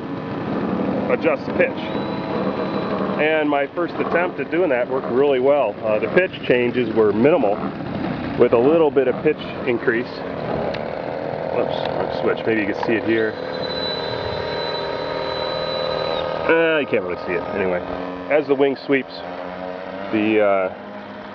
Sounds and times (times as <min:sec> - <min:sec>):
Vehicle: 0:00.0 - 0:21.3
Speech: 0:01.1 - 0:01.9, 0:03.2 - 0:07.6, 0:08.4 - 0:10.2, 0:11.6 - 0:13.4, 0:16.5 - 0:19.3, 0:20.1 - 0:20.8.